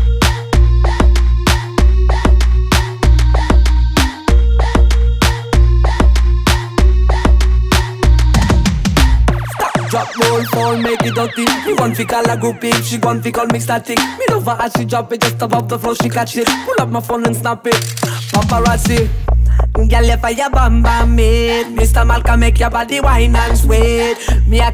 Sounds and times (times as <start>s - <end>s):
Music: 0.0s - 24.7s.